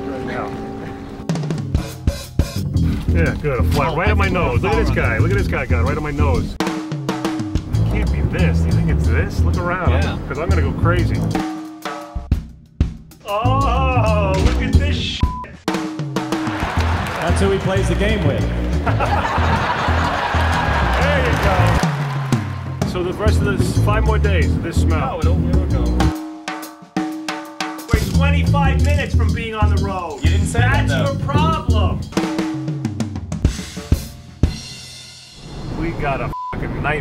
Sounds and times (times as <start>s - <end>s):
Drum kit: 1.2s - 35.9s
Bass drum: 1.6s - 26.2s, 27.8s - 35.0s.